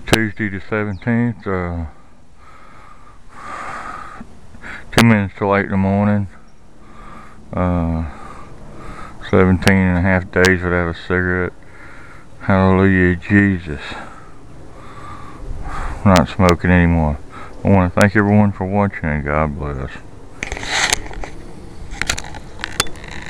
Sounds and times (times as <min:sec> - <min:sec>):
Speech: 0:00.0 - 0:02.0, 0:04.8 - 0:06.4, 0:07.5 - 0:08.2, 0:09.2 - 0:11.6, 0:12.4 - 0:14.1, 0:16.0 - 0:20.1
Outside, rural or natural: 0:00.0 - 0:23.2.